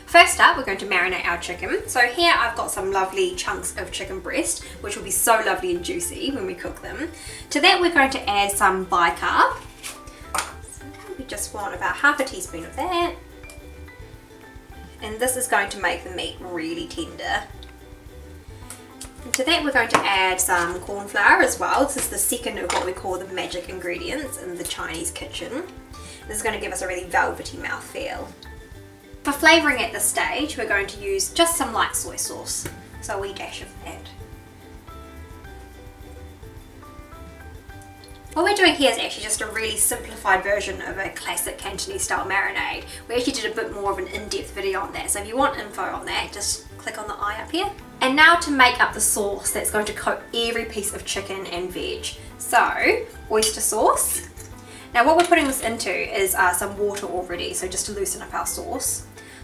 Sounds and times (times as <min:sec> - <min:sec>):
Music: 0:00.0 - 0:59.4
Speech: 0:00.1 - 0:09.6, 0:10.8 - 0:13.2, 0:15.0 - 0:17.5, 0:19.2 - 0:28.4, 0:29.3 - 0:34.2, 0:38.4 - 0:59.1.